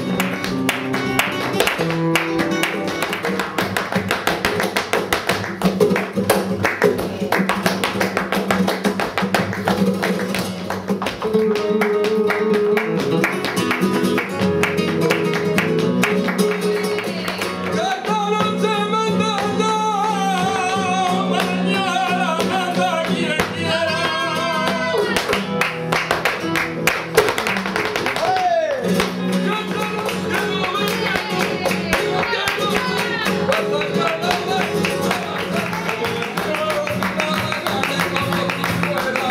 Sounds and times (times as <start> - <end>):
Flamenco: 0.0 - 39.3
Guitar: 0.0 - 39.3.